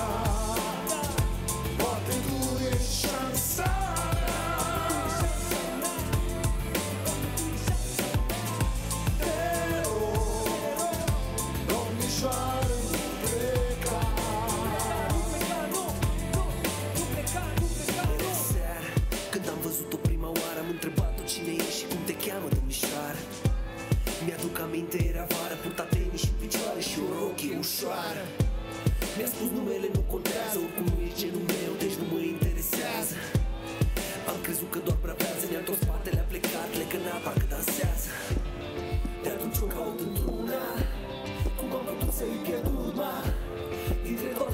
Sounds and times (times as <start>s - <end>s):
Music: 0.0s - 44.5s.